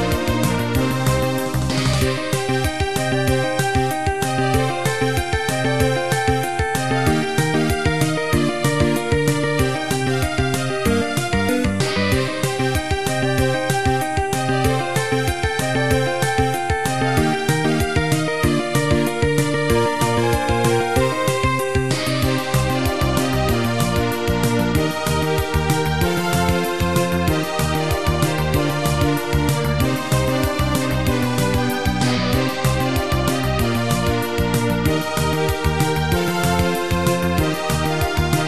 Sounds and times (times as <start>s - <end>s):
Soul music: 0.0s - 35.6s.